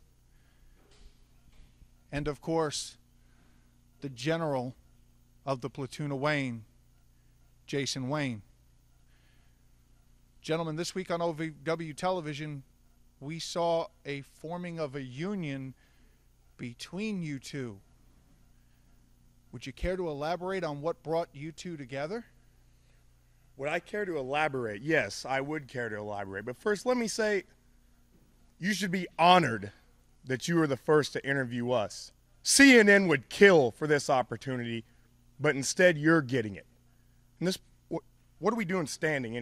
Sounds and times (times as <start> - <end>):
Speech: 2.1 - 3.0, 4.0 - 4.8, 5.4 - 6.7, 7.7 - 8.5, 10.4 - 15.8, 16.6 - 17.8, 19.5 - 22.4, 23.6 - 27.6, 28.6 - 36.7, 37.4 - 39.4.